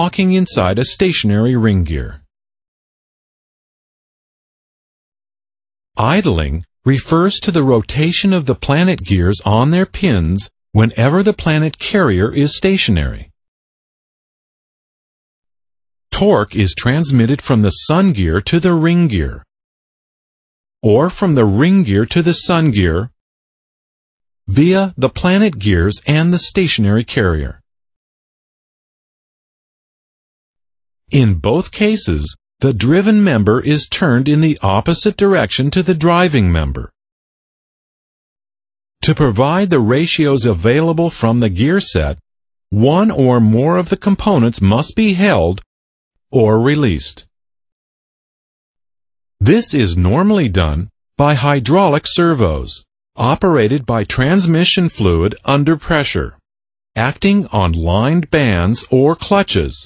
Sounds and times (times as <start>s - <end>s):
Speech synthesizer: 0.0s - 2.3s, 6.0s - 13.4s, 16.1s - 19.5s, 20.8s - 23.2s, 24.5s - 27.6s, 31.1s - 37.0s, 39.0s - 42.2s, 42.8s - 45.7s, 46.4s - 47.3s, 49.4s - 56.4s, 57.0s - 59.8s.